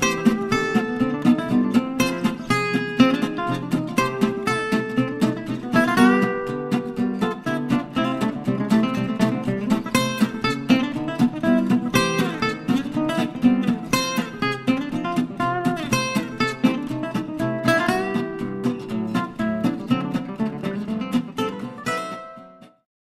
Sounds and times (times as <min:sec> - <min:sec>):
Music: 0:00.0 - 0:22.9.